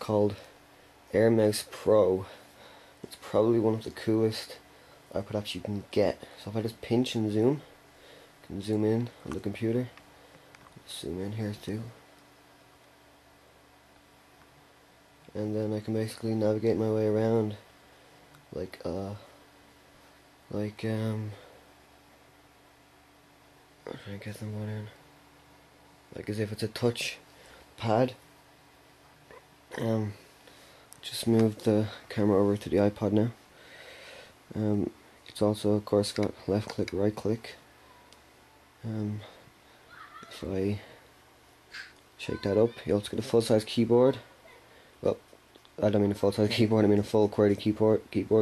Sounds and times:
Speech: 0.0 - 0.5, 1.1 - 2.4, 3.1 - 7.7, 8.5 - 10.0, 10.8 - 12.0, 15.3 - 17.6, 18.5 - 19.3, 20.5 - 21.4, 23.9 - 25.0, 26.1 - 27.2, 27.8 - 28.2, 31.0 - 33.4, 34.5 - 37.6, 38.8 - 39.4, 40.2 - 40.9, 42.2 - 44.3, 45.0 - 45.2, 45.8 - 48.4.

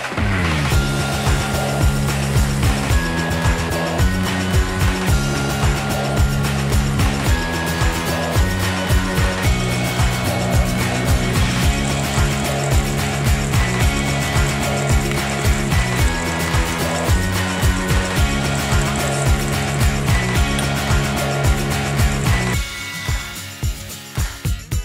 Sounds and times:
Music: 0.0 - 24.8.

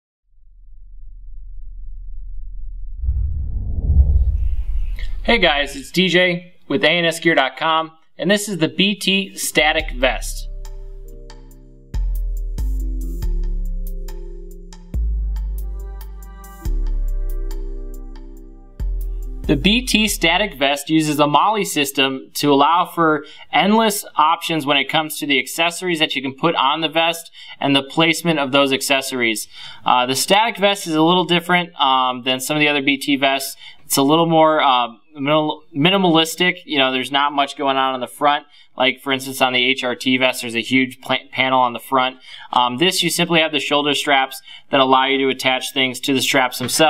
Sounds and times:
Speech: 5.2 - 10.5, 19.5 - 46.8.

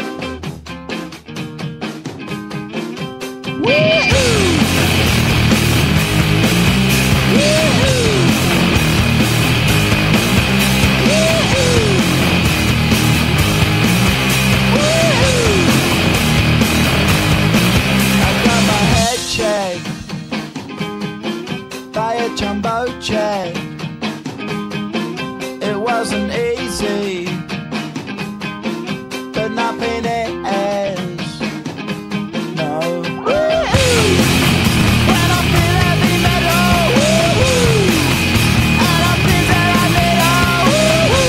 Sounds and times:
Music: 0.0 - 41.2.

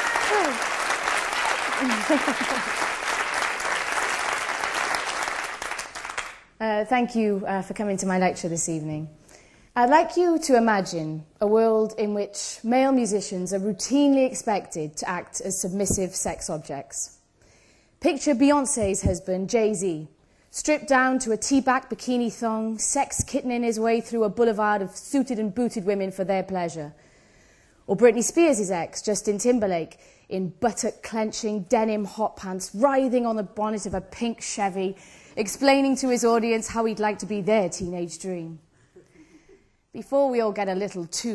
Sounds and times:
Speech: 6.6 - 9.1, 9.8 - 17.2, 18.0 - 27.0, 27.9 - 38.6, 40.0 - 41.3.

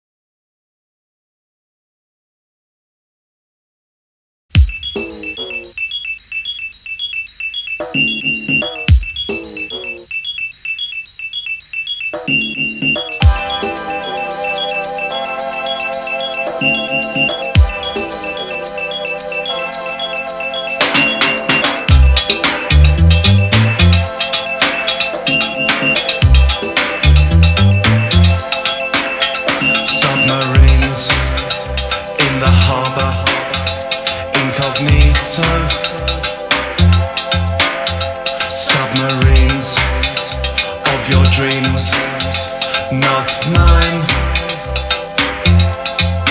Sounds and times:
Music: 4.5 - 6.3, 7.0 - 10.1, 12.0 - 46.3.

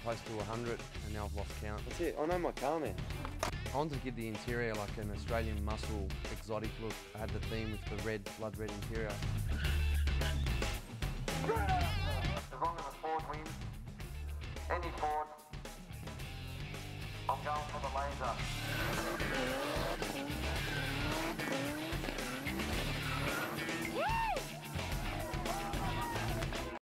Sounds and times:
Speech: 0.0 - 3.0, 3.7 - 9.2, 11.5 - 13.5, 14.7 - 15.3, 17.3 - 18.4
Car: 18.0 - 24.3.

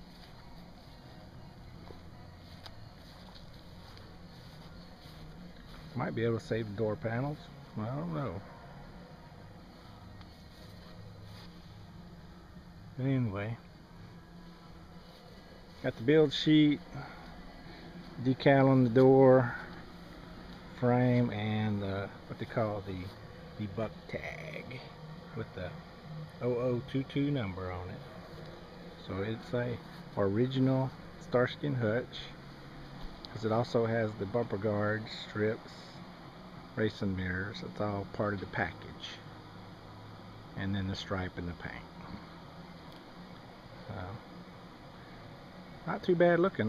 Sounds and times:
Speech: 5.9 - 8.5, 13.0 - 13.7, 15.8 - 17.1, 18.2 - 19.7, 20.7 - 25.8, 26.4 - 28.1, 29.0 - 32.4, 33.3 - 36.0, 36.7 - 39.3, 40.5 - 42.3, 43.8 - 44.3, 45.8 - 46.6.

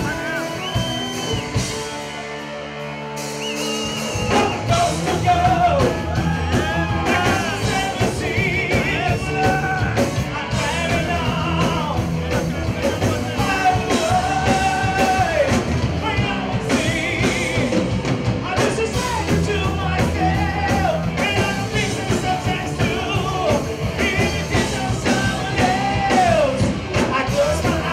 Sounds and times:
Heavy metal: 0.0 - 27.9
Progressive rock: 0.0 - 27.9.

